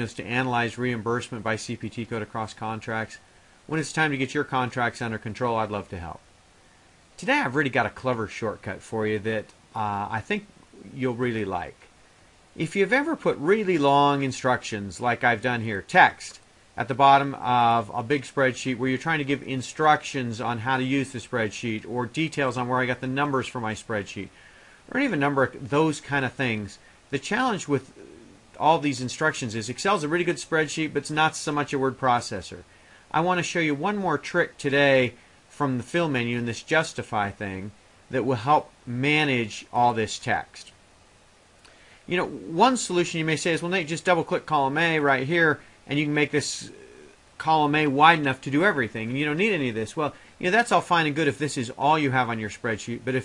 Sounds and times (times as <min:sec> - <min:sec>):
Speech: 0:00.0 - 0:06.3, 0:07.2 - 0:11.9, 0:12.6 - 0:40.8, 0:42.1 - 0:53.2.